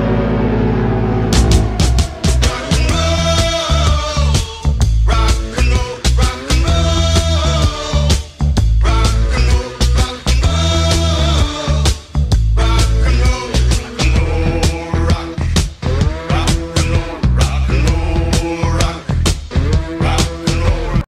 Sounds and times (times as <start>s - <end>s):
Music: 0.0s - 21.0s.